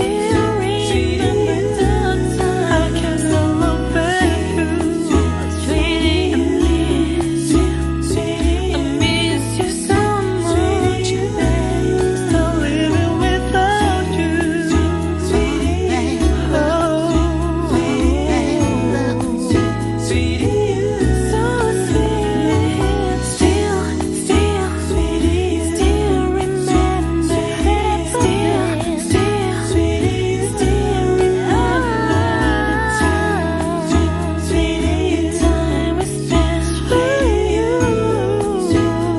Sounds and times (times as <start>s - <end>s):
Singing: 0.0s - 39.1s.